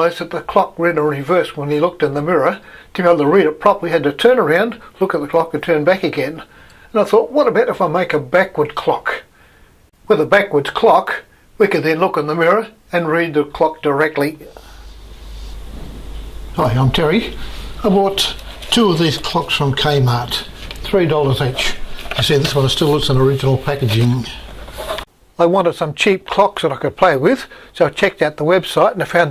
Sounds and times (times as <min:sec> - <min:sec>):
Speech: 0:00.0 - 0:09.3, 0:10.0 - 0:14.6, 0:16.6 - 0:24.5, 0:25.4 - 0:29.3.